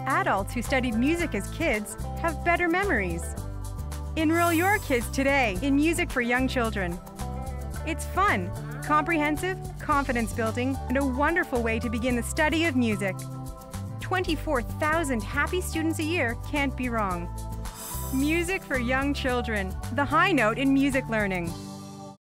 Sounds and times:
Speech: 0:00.0 - 0:03.3, 0:04.2 - 0:07.0, 0:07.9 - 0:13.2, 0:14.0 - 0:17.3, 0:18.1 - 0:21.5
Background music: 0:00.0 - 0:22.2.

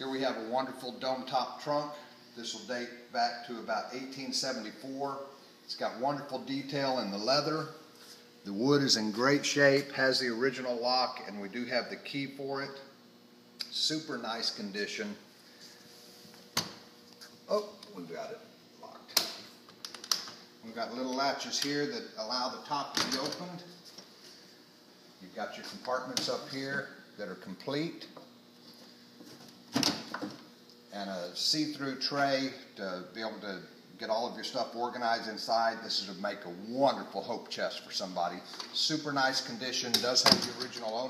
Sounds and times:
Speech: 0:00.0 - 0:07.8, 0:08.4 - 0:12.9, 0:13.6 - 0:15.2, 0:17.5 - 0:19.2, 0:20.6 - 0:23.8, 0:25.2 - 0:28.2, 0:30.9 - 0:41.0.

